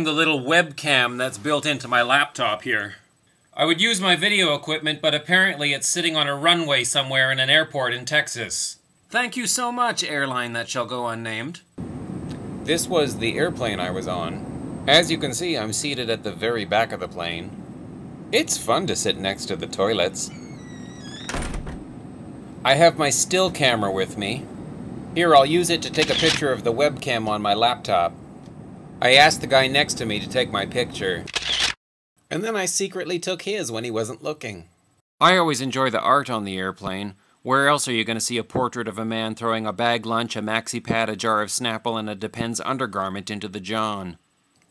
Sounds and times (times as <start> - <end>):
Speech: 0.0 - 11.7, 12.7 - 17.6, 18.4 - 20.4, 22.6 - 24.4, 25.2 - 28.1, 29.0 - 31.3, 32.3 - 44.2
Inside, small room: 0.0 - 44.7.